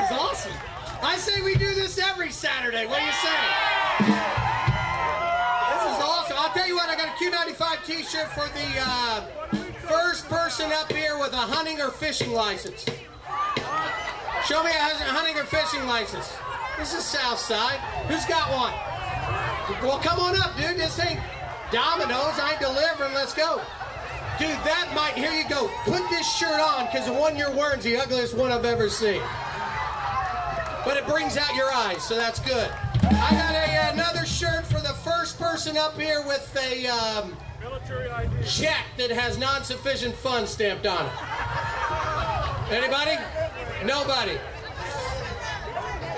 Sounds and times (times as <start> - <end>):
Speech: 0.0 - 3.6, 5.7 - 13.0, 14.4 - 18.8, 19.7 - 23.7, 24.4 - 29.3, 30.8 - 41.2, 42.6 - 46.1
Music: 32.9 - 34.7.